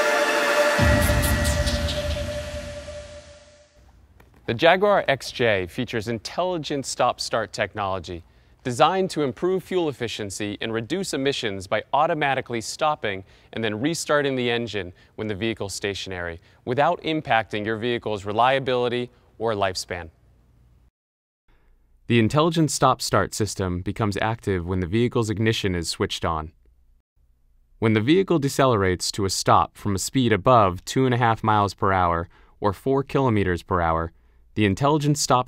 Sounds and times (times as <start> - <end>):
Speech: 4.5 - 20.2, 22.1 - 26.6, 27.8 - 35.4.